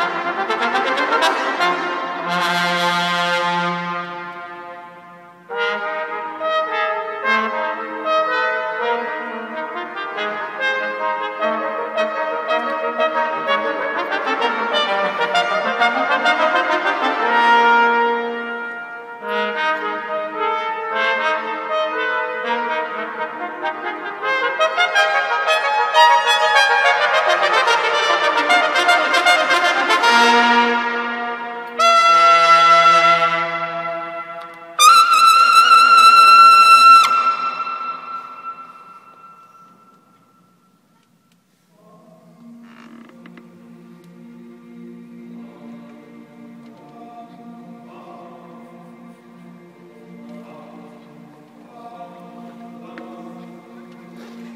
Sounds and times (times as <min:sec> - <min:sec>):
Trombone: 0:00.0 - 0:39.9.